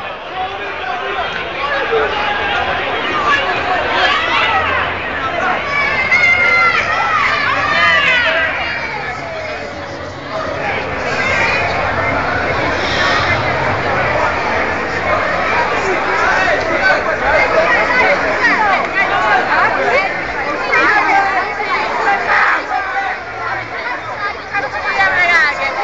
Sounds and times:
Speech: 0.0s - 25.8s.

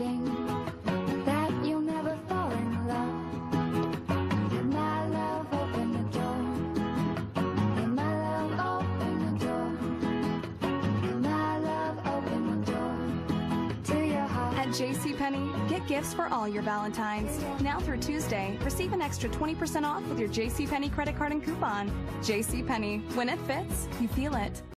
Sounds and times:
Music: 0.0s - 24.7s
Speech: 14.6s - 24.7s.

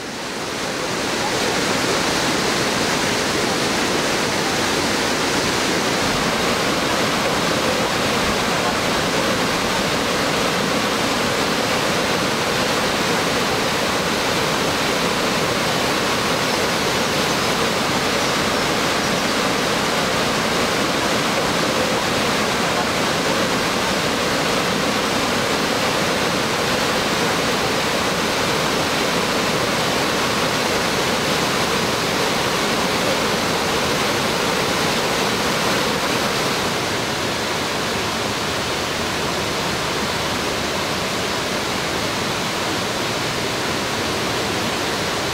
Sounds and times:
Stream: 0.0s - 45.3s
Waterfall: 0.0s - 45.3s.

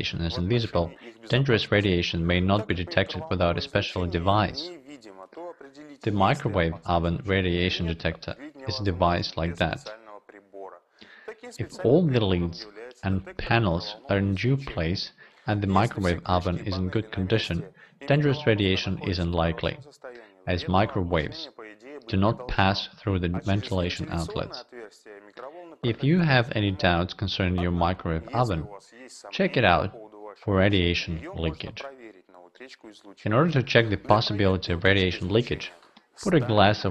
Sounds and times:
Speech: 0.0s - 36.9s.

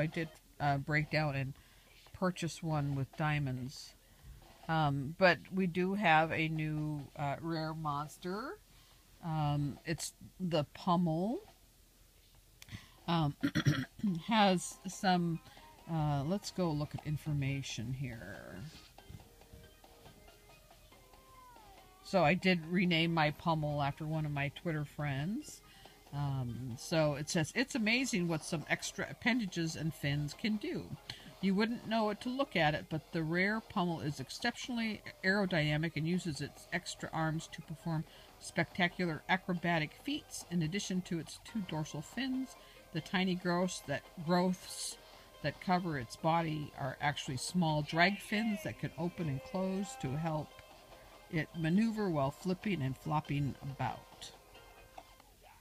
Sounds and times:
Speech: 0.0s - 4.0s, 4.7s - 8.6s, 9.2s - 11.5s, 13.1s - 18.8s, 22.1s - 50.5s, 51.3s - 54.3s.

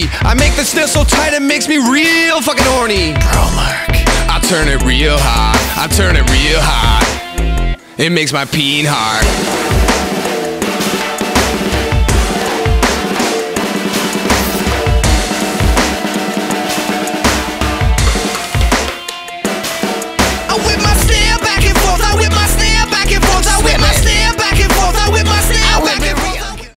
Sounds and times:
Music: 0.0s - 26.7s.

